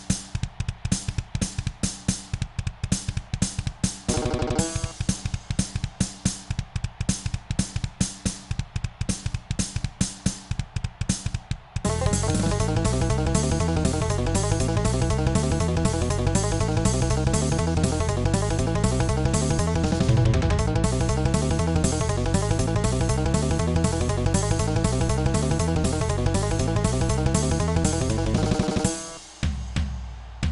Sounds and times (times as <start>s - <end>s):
Musical instrument: 4.1s - 4.9s, 11.9s - 29.2s.